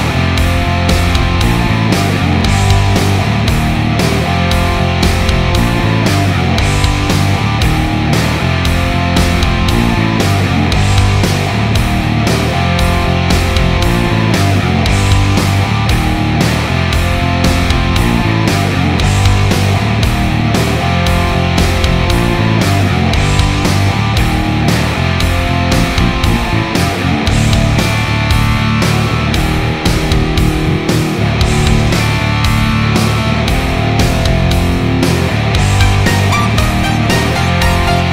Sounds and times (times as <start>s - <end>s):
Guitar: 0.0s - 38.1s
Heavy metal: 0.0s - 38.1s.